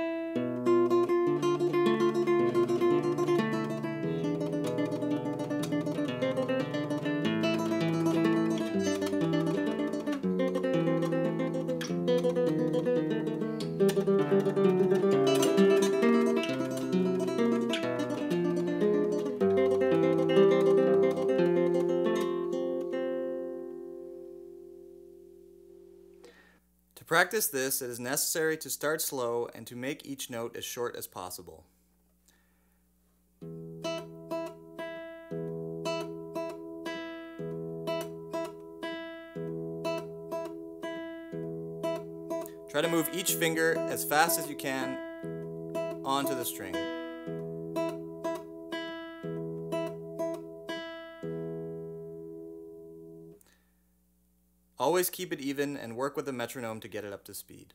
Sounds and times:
Acoustic guitar: 0:00.0 - 0:31.4, 0:32.2 - 0:53.8.

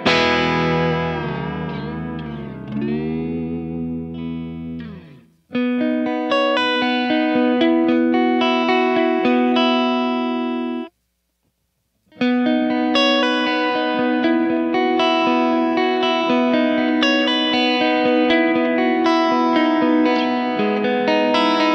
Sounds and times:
Music: 0:00.0 - 0:11.0, 0:12.1 - 0:21.7.

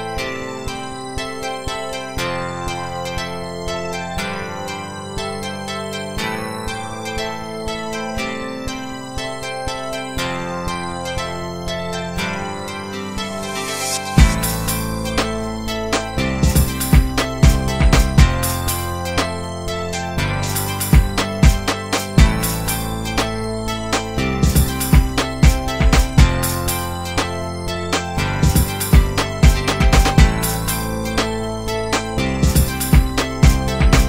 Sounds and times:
Music: 0:00.0 - 0:34.0.

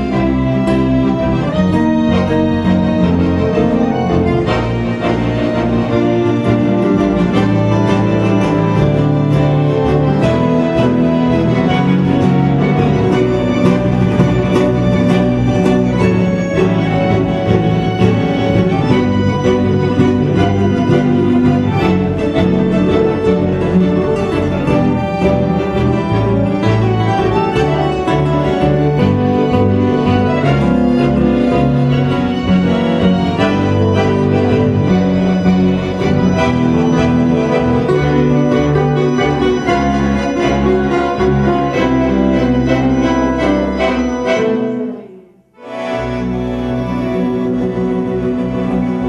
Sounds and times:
Accordion: 0:00.0 - 0:49.0
Orchestra: 0:00.0 - 0:49.0.

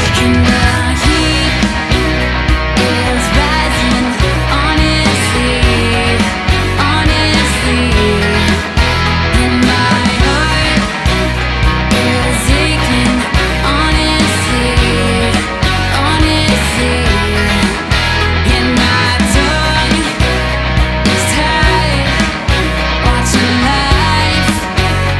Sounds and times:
Music: 0:00.0 - 0:25.1.

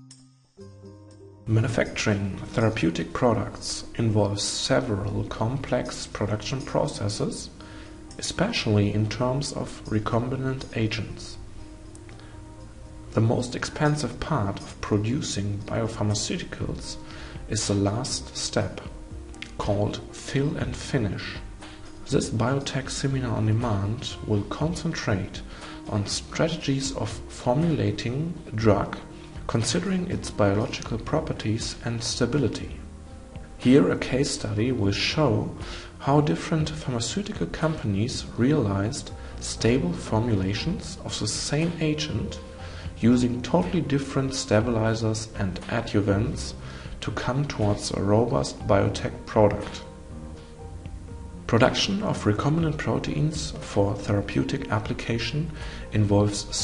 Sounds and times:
Music: 0:00.0 - 0:56.6
Speech: 0:01.5 - 0:07.6, 0:08.2 - 0:11.4, 0:13.2 - 0:32.8, 0:33.6 - 0:42.4, 0:43.0 - 0:49.9, 0:51.5 - 0:56.6.

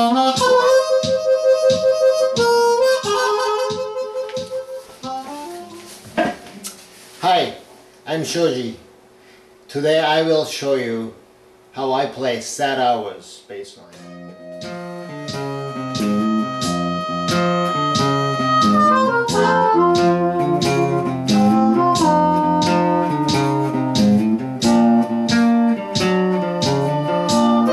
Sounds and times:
Speech: 0:07.2 - 0:08.8, 0:09.7 - 0:11.2, 0:11.8 - 0:14.0
Strum: 0:13.9 - 0:27.7.

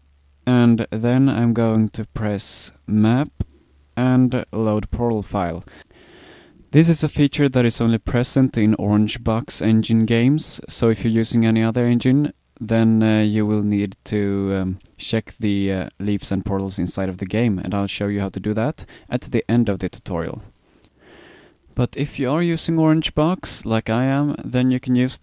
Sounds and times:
Speech: 0:00.5 - 0:05.7, 0:06.7 - 0:20.5, 0:21.8 - 0:25.2.

